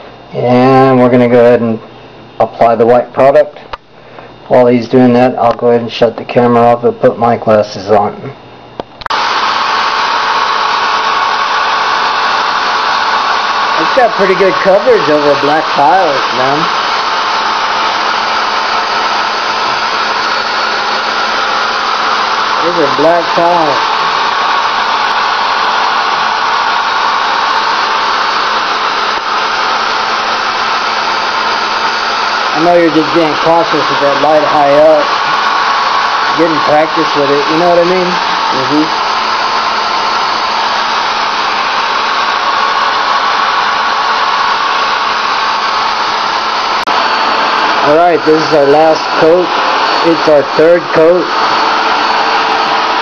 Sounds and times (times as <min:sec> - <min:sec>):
Speech: 0:00.3 - 0:01.8, 0:02.4 - 0:03.6, 0:04.5 - 0:08.4, 0:13.8 - 0:16.7, 0:22.6 - 0:23.8, 0:32.6 - 0:35.1, 0:36.4 - 0:39.0, 0:47.8 - 0:51.3.